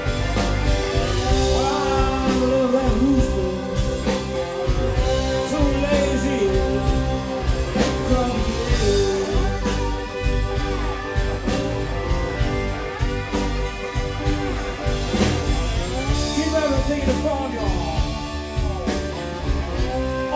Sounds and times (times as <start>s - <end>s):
Blues: 0.0s - 20.3s.